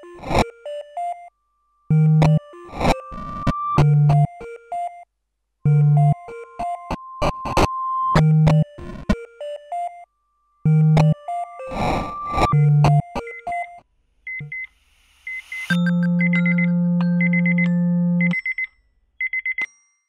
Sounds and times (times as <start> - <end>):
Music: 0.0 - 5.0, 5.6 - 13.8, 15.7 - 18.4
Alarm: 15.3 - 19.7.